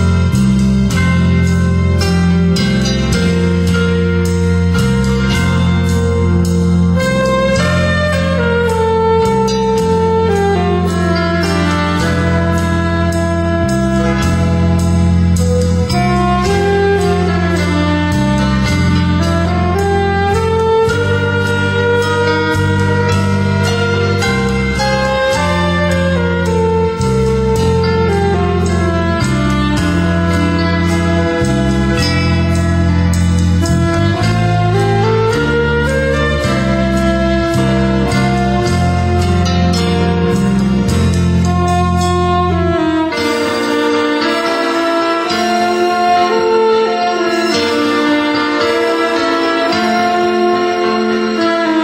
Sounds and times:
Tender music: 0:00.0 - 0:51.8.

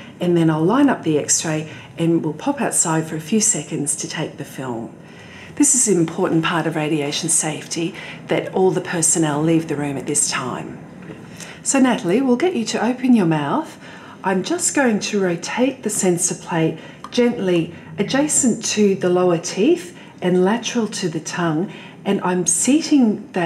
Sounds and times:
Speech: 0:00.2 - 0:05.0, 0:05.6 - 0:10.8, 0:11.6 - 0:23.4.

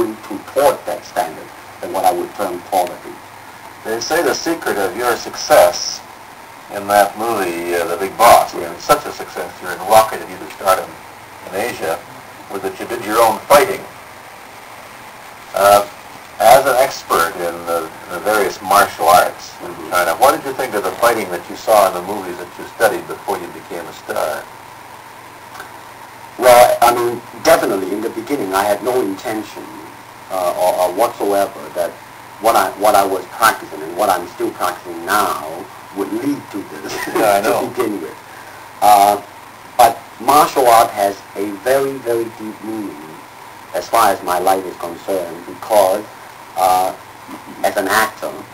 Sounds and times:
Speech: 0:00.0 - 0:03.2, 0:03.8 - 0:06.0, 0:06.7 - 0:13.9, 0:15.5 - 0:24.5, 0:26.4 - 0:43.2, 0:43.8 - 0:48.5.

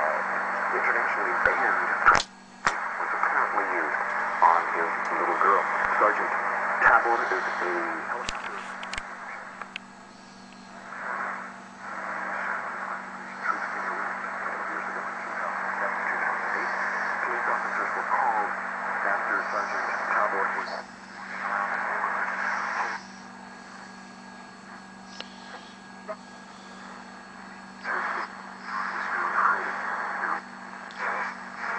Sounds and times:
Speech: 0:00.0 - 0:02.2, 0:02.9 - 0:08.8, 0:13.3 - 0:22.2, 0:27.8 - 0:31.7
Radio: 0:00.0 - 0:31.7.

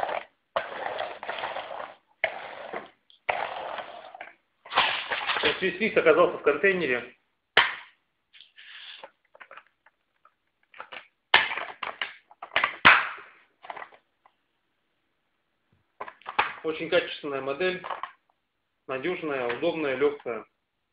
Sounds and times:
Speech: 0:05.4 - 0:07.2, 0:16.6 - 0:17.9, 0:18.9 - 0:20.5.

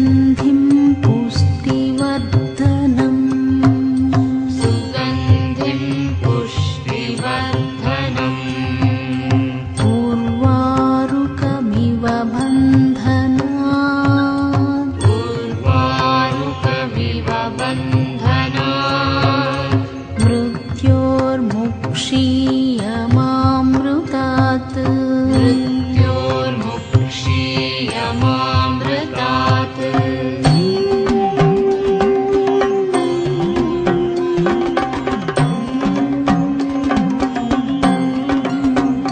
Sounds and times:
Mantra: 0:00.0 - 0:34.9.

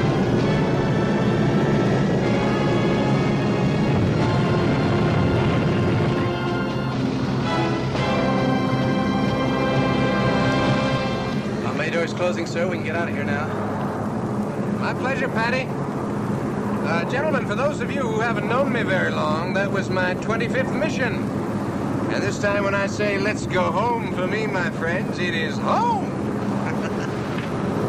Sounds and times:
Music: 0:00.0 - 0:11.6
Speech: 0:11.6 - 0:13.5, 0:14.8 - 0:15.7, 0:16.8 - 0:21.3, 0:22.1 - 0:26.1.

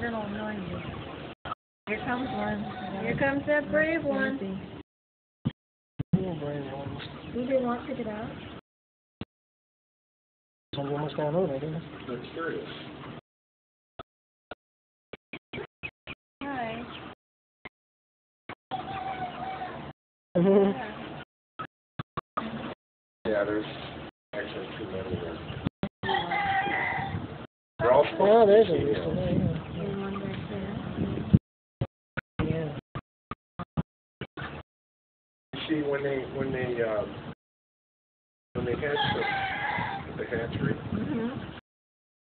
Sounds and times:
Chicken, rooster: 0:00.3 - 0:03.2, 0:18.7 - 0:20.0, 0:24.5 - 0:30.4, 0:38.9 - 0:41.6.

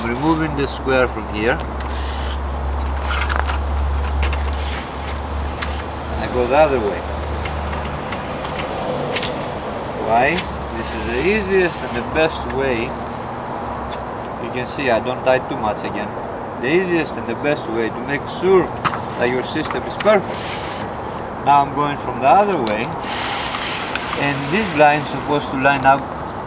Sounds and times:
Speech: 0:00.0 - 0:01.6, 0:06.2 - 0:07.0, 0:10.0 - 0:12.9, 0:14.4 - 0:20.3, 0:21.4 - 0:23.0, 0:24.2 - 0:26.1.

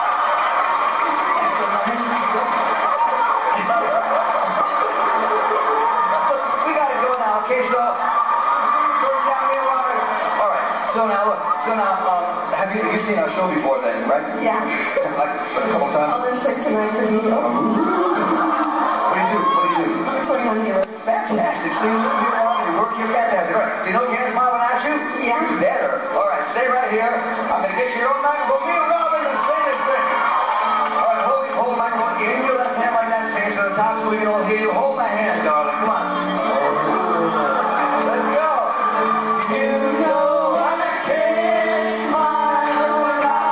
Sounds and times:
Music: 0:00.0 - 0:43.5.

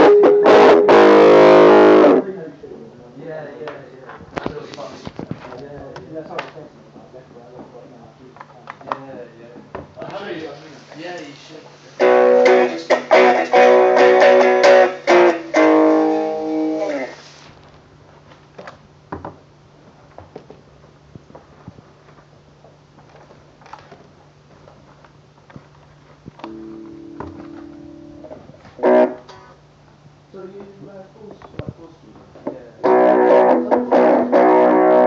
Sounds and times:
Bass guitar: 0:00.0 - 0:02.3, 0:12.0 - 0:17.2, 0:26.3 - 0:29.5, 0:32.8 - 0:35.0
Strum: 0:00.0 - 0:02.3, 0:12.0 - 0:17.2, 0:26.4 - 0:29.6, 0:32.8 - 0:35.0
Speech: 0:02.2 - 0:12.0, 0:30.3 - 0:32.9.

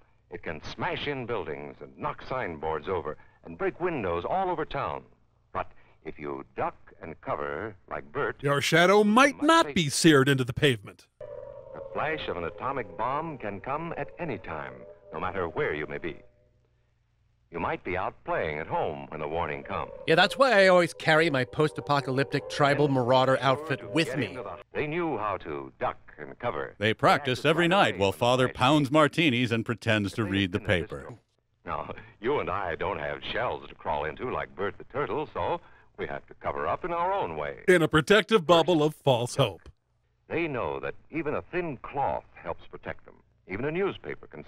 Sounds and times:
Speech: 0:08.4 - 0:11.0, 0:20.1 - 0:24.6, 0:26.8 - 0:32.0, 0:37.7 - 0:39.7.

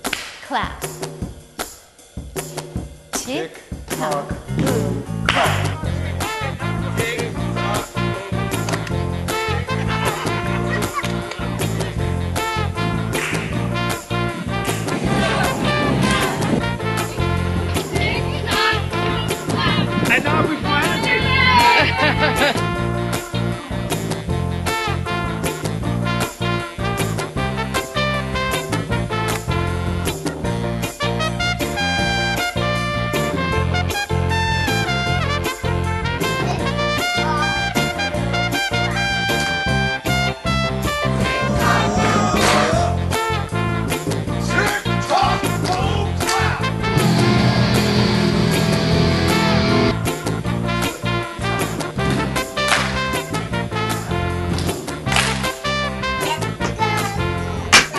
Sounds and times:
Music: 0:00.0 - 0:57.9.

